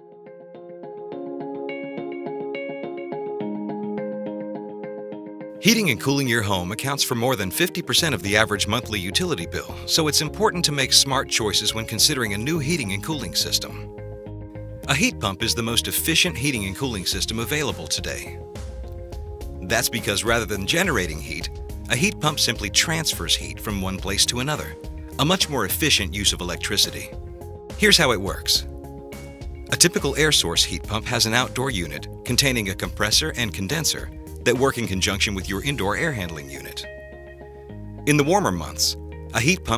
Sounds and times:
Music: 0.0s - 39.7s
Speech: 5.6s - 13.9s, 14.9s - 18.4s, 19.6s - 27.2s, 27.8s - 28.7s, 29.7s - 36.9s, 38.1s - 39.7s.

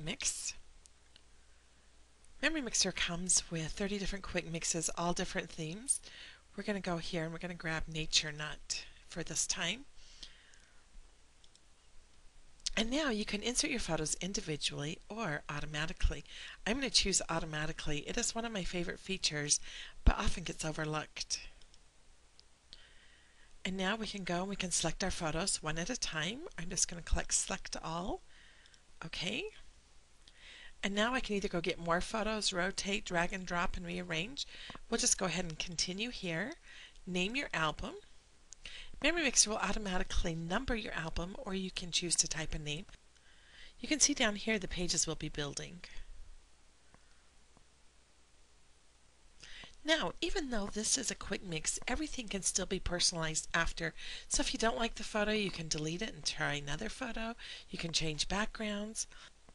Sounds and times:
Speech: 0.0s - 0.6s, 2.4s - 6.0s, 6.6s - 9.9s, 12.7s - 21.6s, 23.6s - 28.2s, 29.0s - 29.6s, 30.8s - 38.1s, 39.0s - 43.0s, 43.8s - 46.0s, 49.8s - 59.2s.

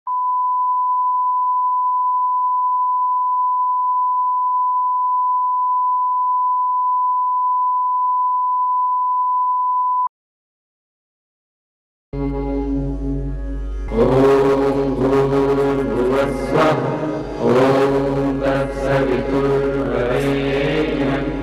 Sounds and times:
Beep, bleep: 0.1s - 10.1s.

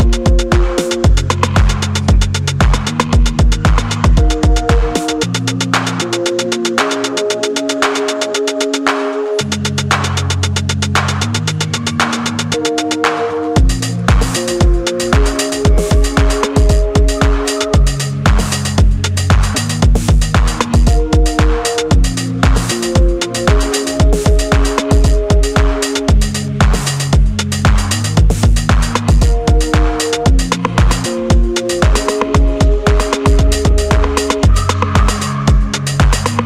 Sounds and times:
Electronica: 0.0s - 36.4s.

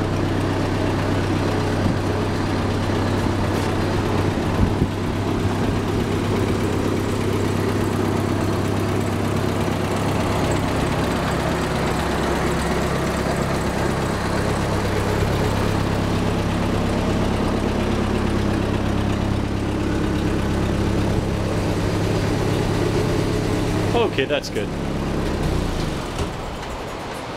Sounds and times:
Vehicle: 0.0s - 27.3s
Speech: 23.9s - 24.7s.

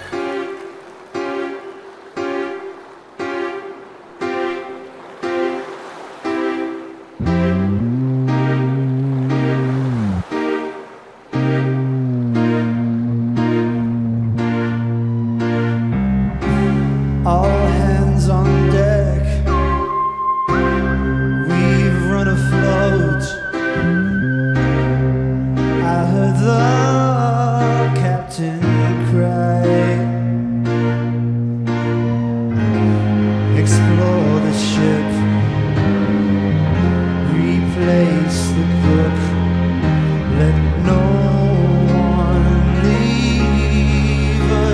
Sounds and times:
Music: 0.0s - 44.7s.

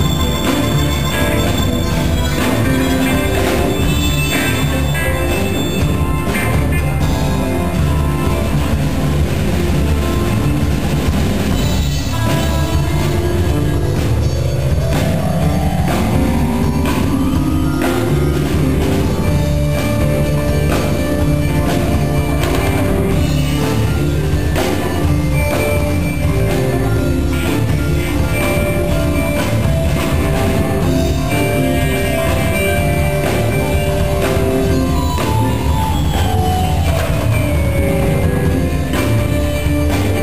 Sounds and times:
Music: 0.0s - 40.2s.

